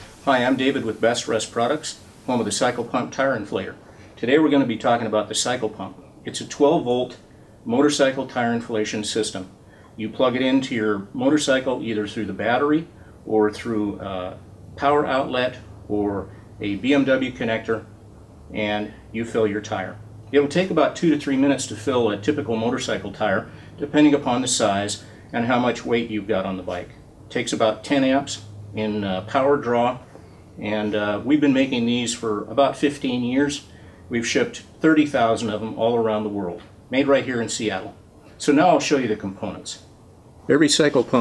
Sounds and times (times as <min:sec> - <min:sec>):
Speech: 0:00.2 - 0:17.9, 0:18.5 - 0:30.0, 0:30.6 - 0:39.9, 0:40.5 - 0:41.2.